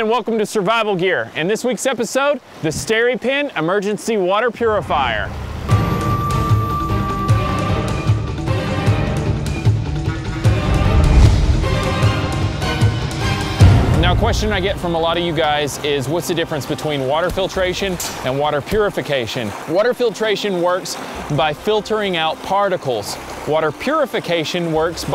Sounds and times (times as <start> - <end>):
Speech: 0.0 - 5.3, 14.0 - 25.1
Music: 4.7 - 25.1.